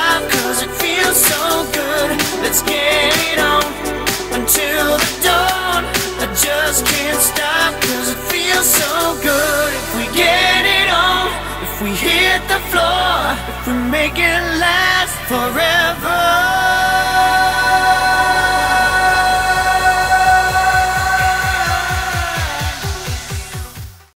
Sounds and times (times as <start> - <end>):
Pop music: 0.0 - 24.1.